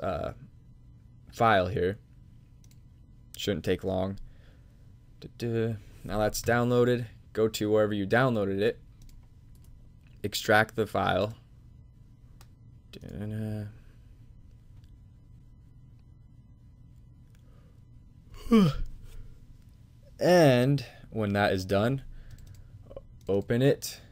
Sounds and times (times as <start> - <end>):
Speech: 5.2 - 8.8, 10.2 - 11.4, 12.9 - 13.8, 20.2 - 22.0, 23.3 - 24.1.